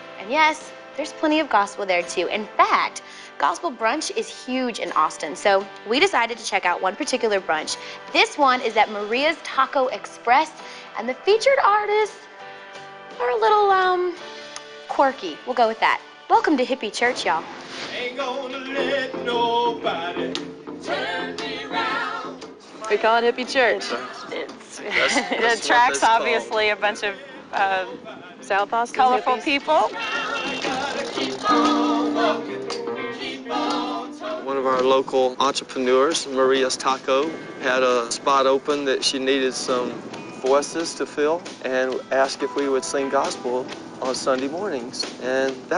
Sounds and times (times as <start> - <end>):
Music: 0.0 - 45.7.